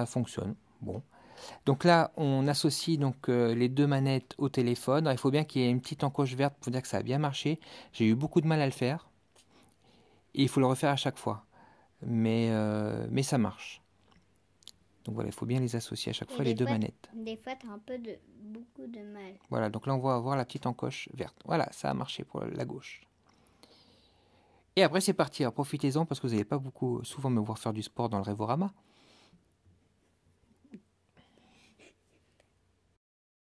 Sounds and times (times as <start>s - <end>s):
Speech: 0.0s - 9.1s, 10.4s - 11.4s, 12.0s - 13.8s, 15.1s - 18.7s, 19.4s - 23.1s, 24.8s - 28.8s.